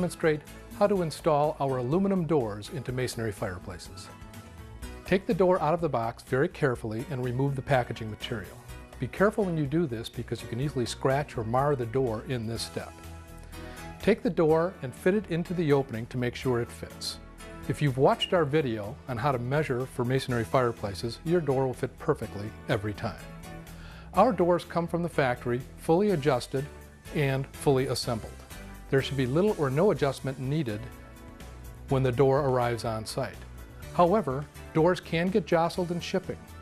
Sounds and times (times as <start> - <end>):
Speech: 0.0 - 4.1, 5.1 - 12.9, 14.0 - 23.3, 24.2 - 30.9, 31.9 - 33.4, 34.0 - 36.4
Music: 0.0 - 36.6.